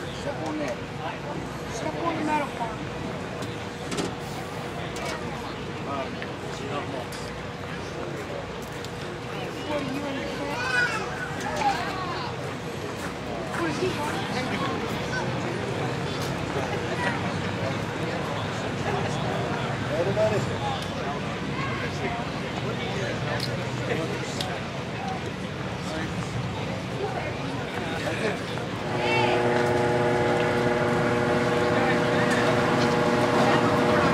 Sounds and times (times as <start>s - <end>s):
Speech: 0.0s - 3.8s, 4.4s - 29.4s.